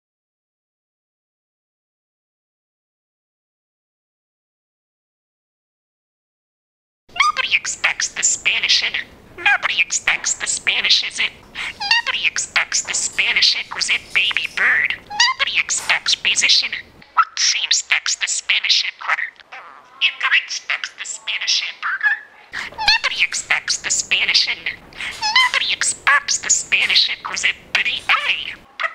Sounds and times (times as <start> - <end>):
Inside, small room: 7.1 - 28.9
Speech: 7.1 - 28.9.